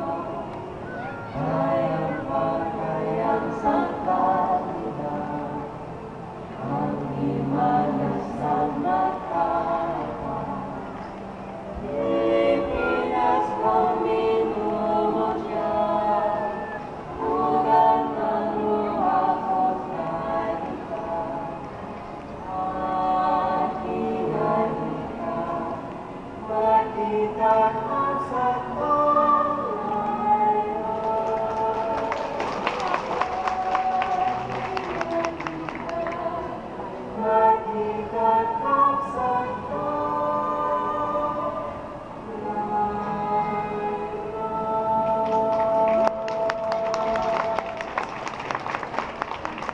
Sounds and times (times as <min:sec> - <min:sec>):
Choir: 0:00.0 - 0:49.7
Female singing: 0:01.3 - 0:05.8, 0:11.8 - 0:21.5, 0:26.4 - 0:48.1.